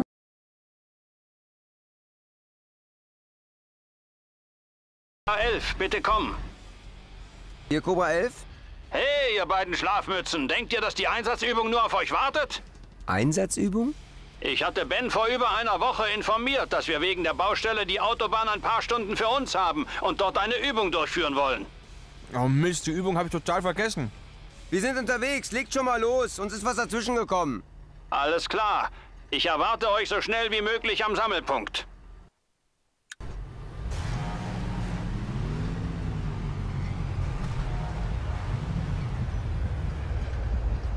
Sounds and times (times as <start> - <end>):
Speech: 5.3 - 6.4, 7.7 - 8.4, 9.0 - 21.7, 22.3 - 24.1, 24.7 - 31.9
Music: 5.3 - 28.2.